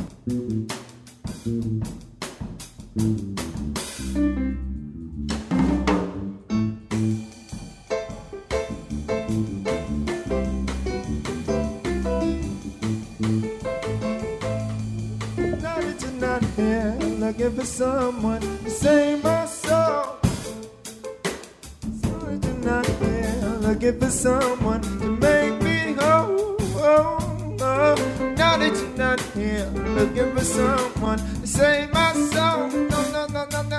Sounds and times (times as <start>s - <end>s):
Ska: 0.0s - 33.7s.